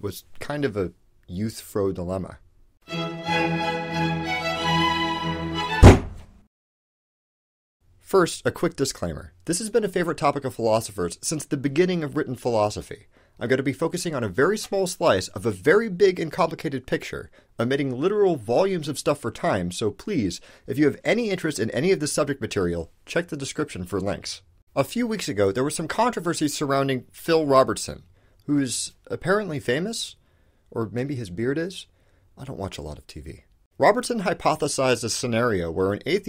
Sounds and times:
Narration, monologue: 0.0 - 3.8, 7.8 - 36.2.

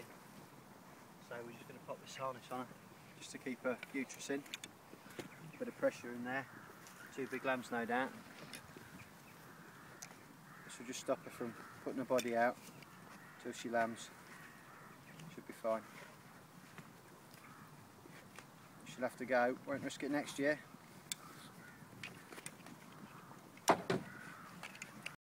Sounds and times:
Speech: 1.2 - 4.5, 5.5 - 6.5, 7.1 - 8.2, 15.3 - 15.9, 18.9 - 20.6.

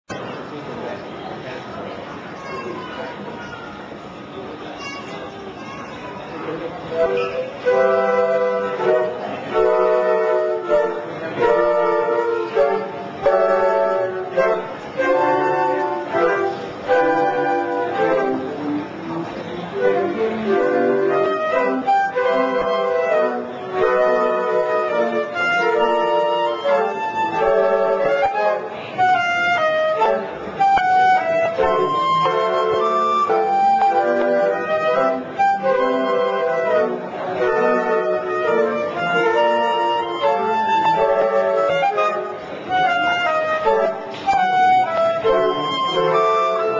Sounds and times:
Inside, large room or hall: 0.0 - 46.7
Speech: 0.1 - 21.8, 25.8 - 30.7, 31.5 - 44.0
Flute: 6.2 - 46.7.

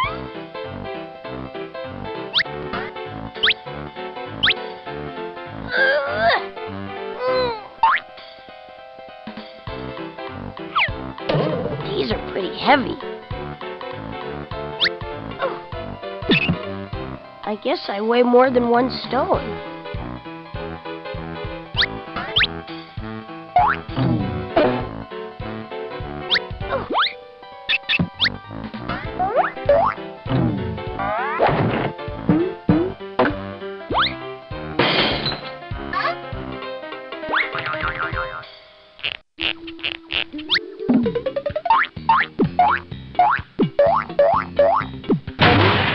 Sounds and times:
Music: 0.0 - 45.9.

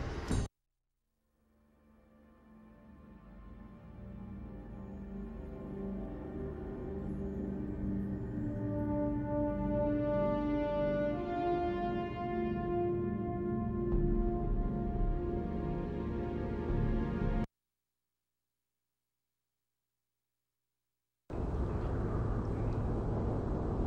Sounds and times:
Music: 1.3 - 17.5.

